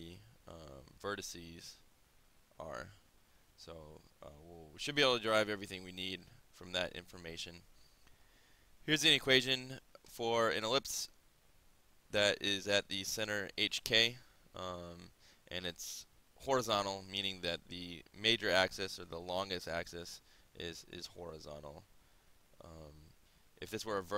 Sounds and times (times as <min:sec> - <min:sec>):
Speech: 0:00.0 - 0:01.8, 0:02.6 - 0:03.0, 0:03.6 - 0:07.6, 0:08.9 - 0:11.2, 0:12.1 - 0:21.9, 0:22.6 - 0:24.1.